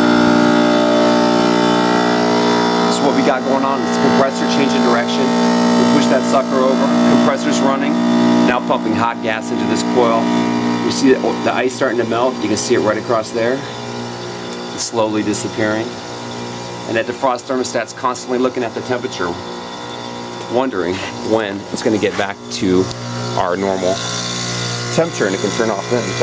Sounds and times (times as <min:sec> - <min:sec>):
Speech: 0:02.9 - 0:13.7, 0:14.8 - 0:16.0, 0:16.9 - 0:19.4, 0:20.5 - 0:24.0, 0:24.9 - 0:26.2.